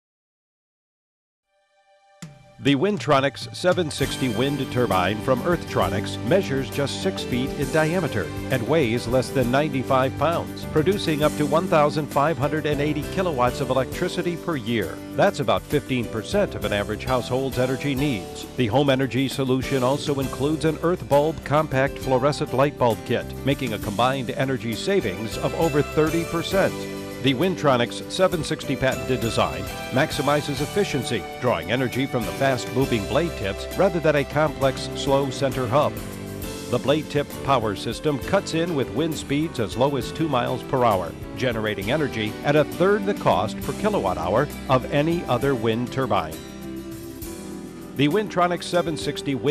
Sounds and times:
Music: 0:01.4 - 0:49.5
Speech: 0:02.6 - 0:36.0, 0:36.7 - 0:46.4, 0:48.0 - 0:49.5.

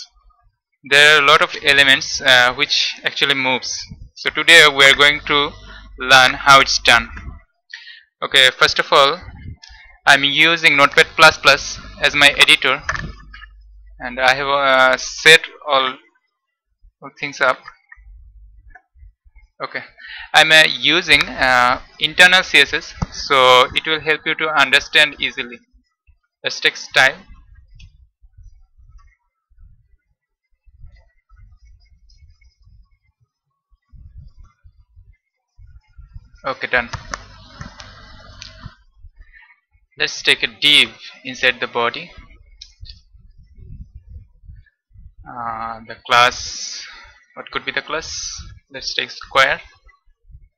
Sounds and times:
Speech: 0:00.9 - 0:16.1, 0:17.0 - 0:18.2, 0:19.6 - 0:25.7, 0:26.4 - 0:27.9, 0:36.0 - 0:44.4, 0:45.2 - 0:50.0.

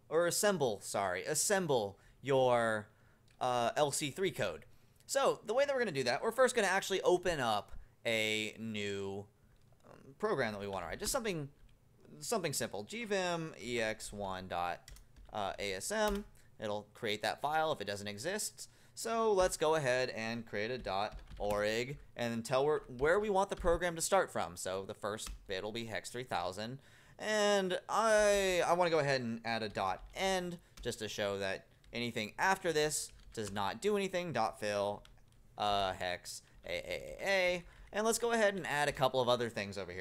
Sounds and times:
Speech: 0:00.1 - 0:09.3, 0:09.9 - 0:40.0.

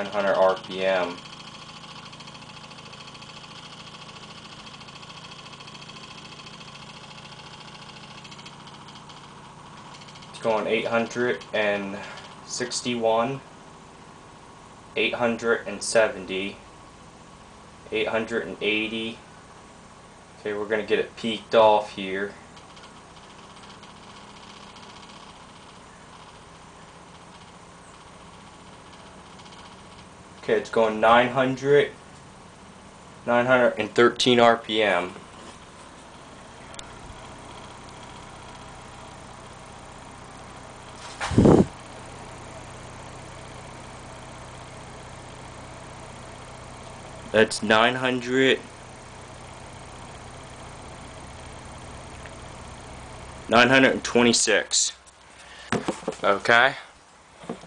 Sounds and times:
Speech: 0:00.0 - 0:01.2, 0:10.4 - 0:13.4, 0:15.0 - 0:16.6, 0:17.9 - 0:19.2, 0:20.4 - 0:22.4, 0:30.4 - 0:32.0, 0:33.3 - 0:35.2, 0:47.3 - 0:48.7, 0:53.5 - 0:55.0, 0:56.2 - 0:56.9.

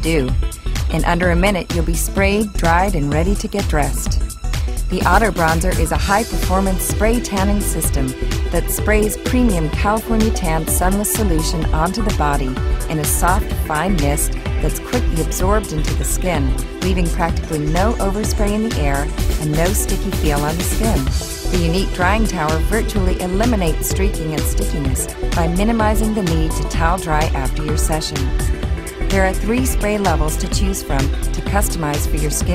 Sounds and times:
Speech: 0:00.0 - 0:04.2, 0:04.9 - 0:28.3, 0:29.1 - 0:32.5
Music: 0:00.0 - 0:32.5.

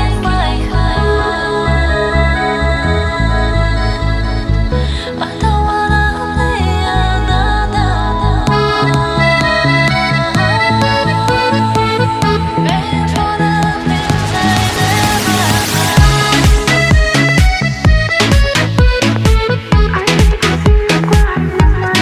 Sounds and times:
Music: 0:00.0 - 0:22.0.

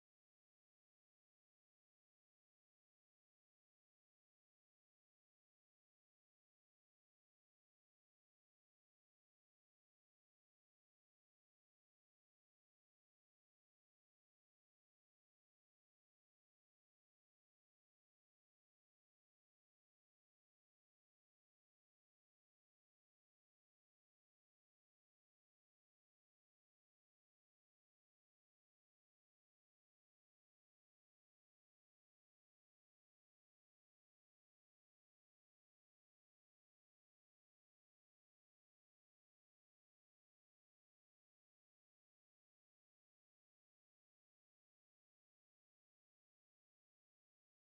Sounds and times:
Silence: 0:00.0 - 0:47.6.

